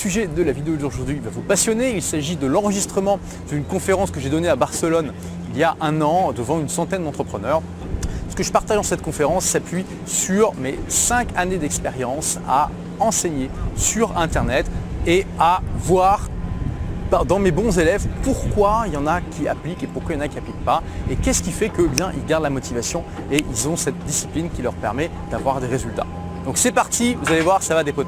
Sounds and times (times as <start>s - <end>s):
Speech: 0.0s - 16.3s, 17.1s - 28.0s.